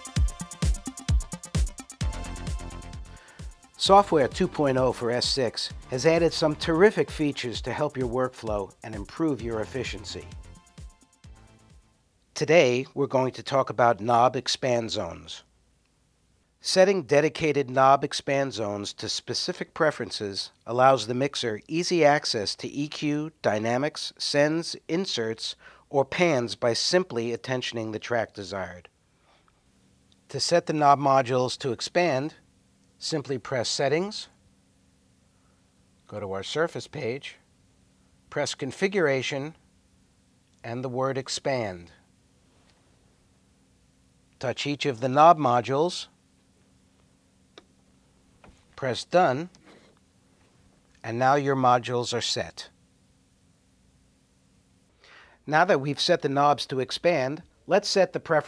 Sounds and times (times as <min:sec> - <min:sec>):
Speech: 0:03.8 - 0:10.3, 0:12.4 - 0:15.5, 0:16.6 - 0:28.9, 0:30.3 - 0:32.4, 0:33.0 - 0:34.4, 0:36.1 - 0:37.4, 0:38.3 - 0:39.6, 0:40.6 - 0:42.0, 0:44.4 - 0:46.2, 0:48.8 - 0:49.6, 0:51.0 - 0:52.8, 0:55.4 - 0:58.4.